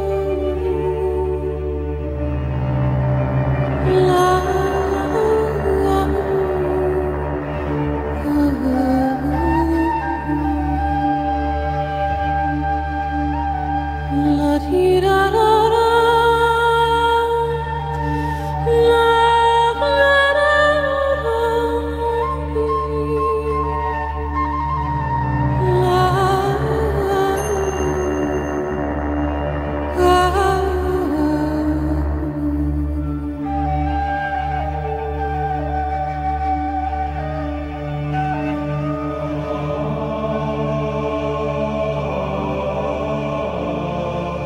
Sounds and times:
Music: 0.0 - 44.4.

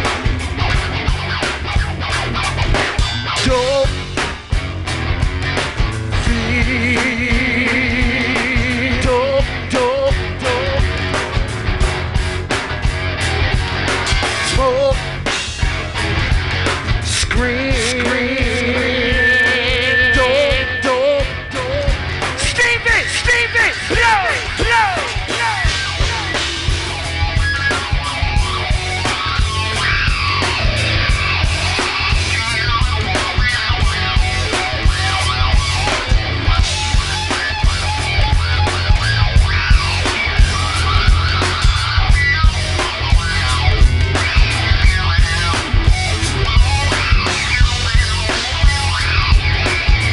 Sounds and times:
Heavy metal: 0.0 - 50.1.

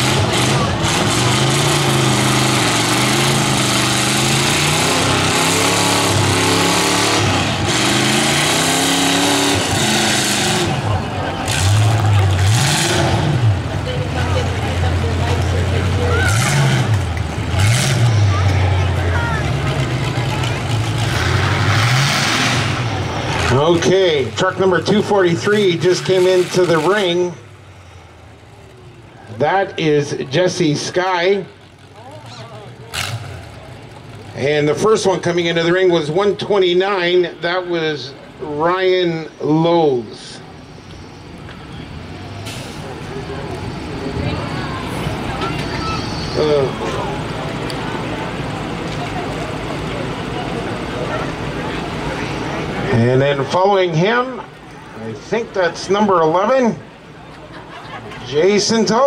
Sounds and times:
Vehicle: 0.0 - 59.0
Speech: 23.5 - 27.4, 29.3 - 33.0, 34.4 - 40.4, 49.0 - 56.9, 58.2 - 59.0.

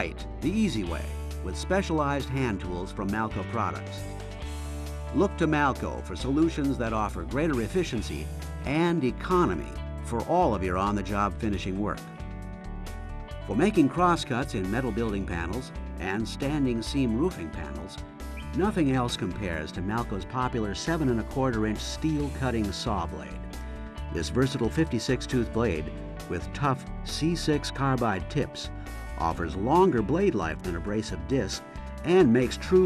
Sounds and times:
Speech: 0.0 - 4.0, 5.1 - 12.0, 13.5 - 23.4, 24.1 - 32.8
Music: 0.0 - 32.8.

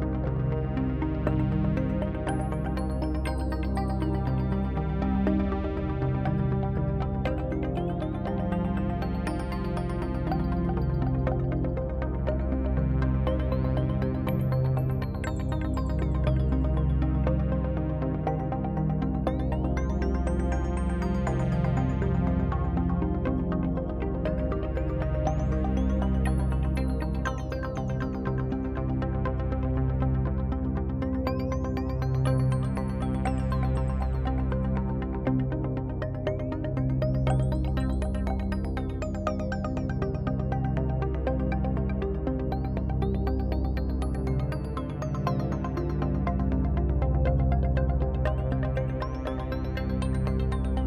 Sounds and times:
Music: 0.0 - 50.8.

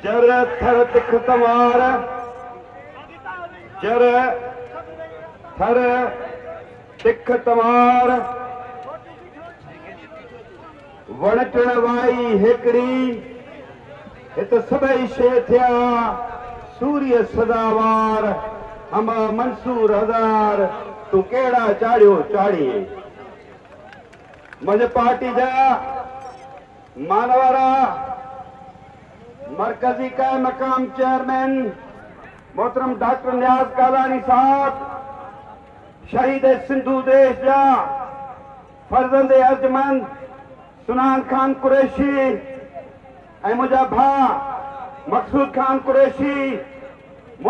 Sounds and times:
Male speech, man speaking: 0.0 - 23.4, 24.6 - 26.3, 27.0 - 28.4, 29.2 - 38.3, 38.9 - 47.5
Narration, monologue: 0.0 - 47.5.

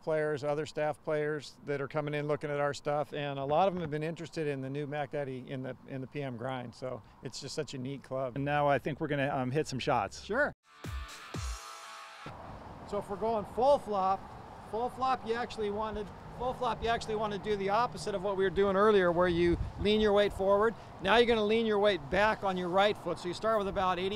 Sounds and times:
Speech: 0.0 - 10.6, 12.9 - 24.1
Music: 10.6 - 12.3.

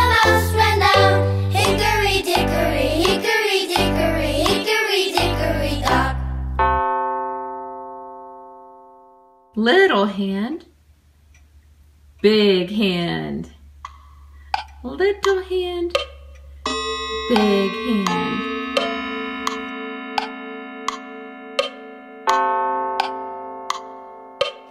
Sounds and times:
Music: 0.0 - 6.9, 16.7 - 24.7
Speech: 9.6 - 10.7, 12.2 - 13.6, 14.8 - 16.0, 17.3 - 18.5.

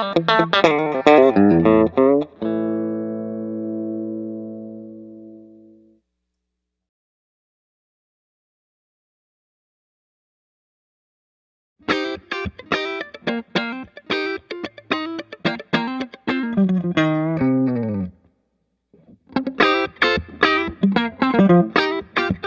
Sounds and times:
Music: 0.0 - 6.1, 11.8 - 18.3, 19.0 - 22.4.

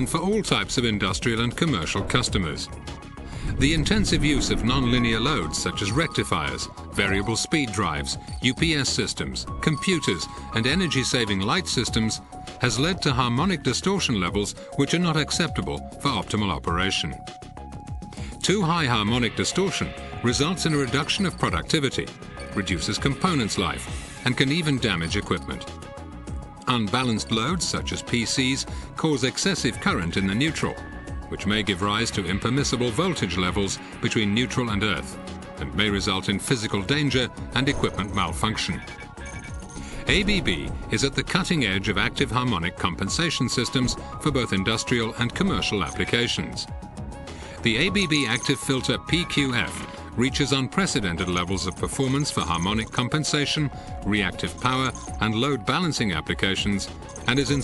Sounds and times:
Speech: 0.0 - 2.7, 3.6 - 17.2, 18.4 - 25.7, 26.6 - 38.9, 40.1 - 46.7, 47.6 - 57.6
Music: 0.0 - 57.6.

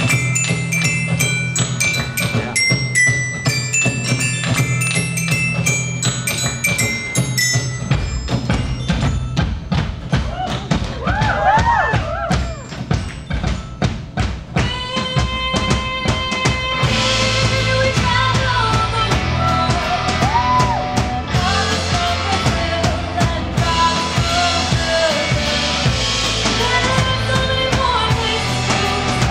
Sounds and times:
Glockenspiel: 0.0 - 10.2, 12.4 - 15.3
Marimba, xylophone: 0.0 - 18.5.

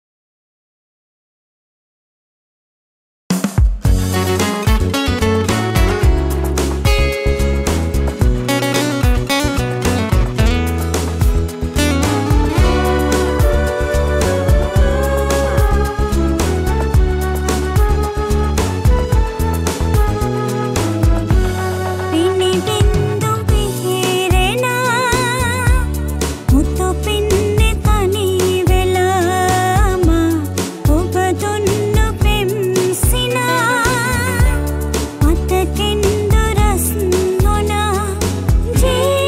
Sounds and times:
Music: 3.3 - 39.2.

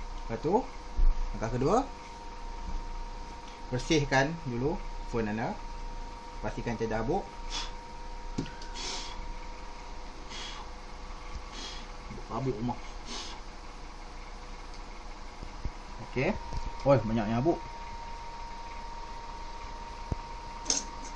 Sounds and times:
Speech: 0.3 - 0.7, 1.4 - 1.9, 3.7 - 5.6, 6.4 - 7.3, 12.2 - 12.8, 16.0 - 17.6.

